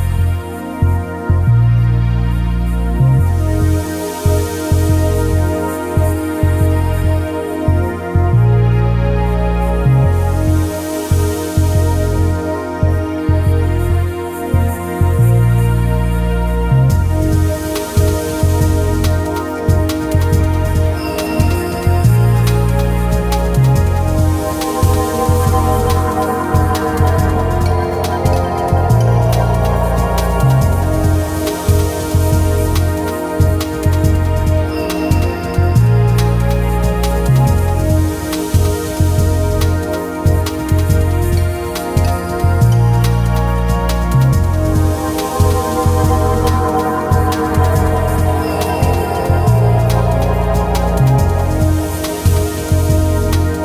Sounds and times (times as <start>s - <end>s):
Music: 0.0s - 53.6s.